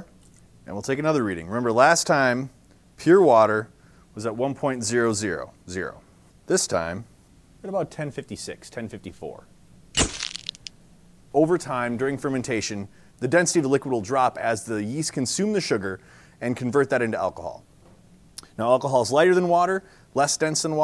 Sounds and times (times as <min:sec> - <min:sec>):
Speech: 0:00.7 - 0:09.5, 0:11.3 - 0:17.7, 0:18.6 - 0:20.8.